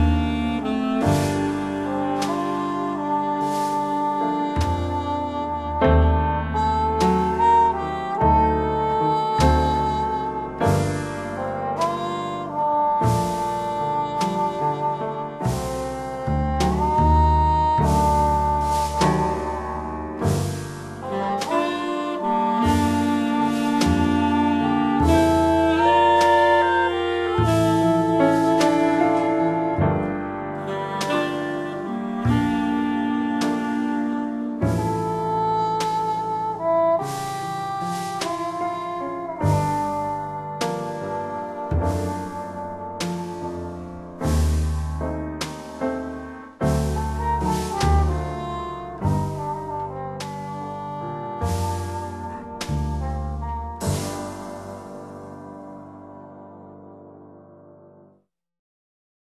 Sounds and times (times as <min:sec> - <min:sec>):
Music: 0:00.0 - 0:58.4.